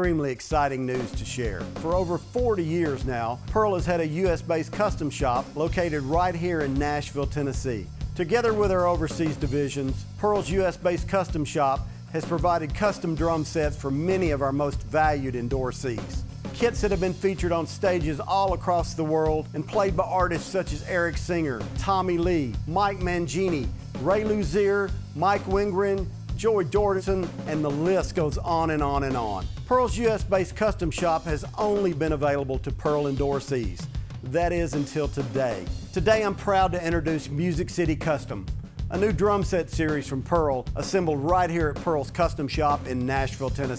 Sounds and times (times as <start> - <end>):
Rhythm and blues: 0.0 - 43.7
Speech: 0.0 - 43.7.